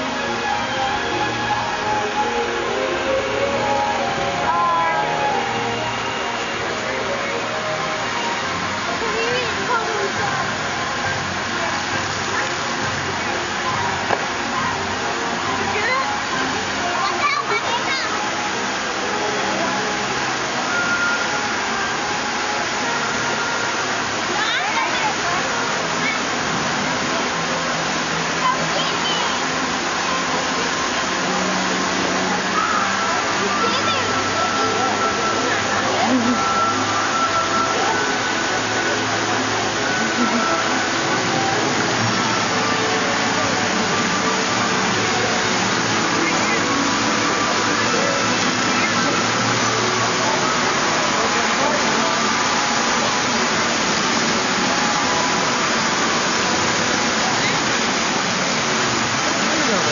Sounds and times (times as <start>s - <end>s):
Music: 0.0s - 59.9s
Waterfall: 0.0s - 59.9s
Speech: 8.8s - 18.4s, 24.2s - 27.4s, 28.2s - 29.6s, 32.3s - 36.4s, 50.4s - 52.5s, 59.3s - 59.9s.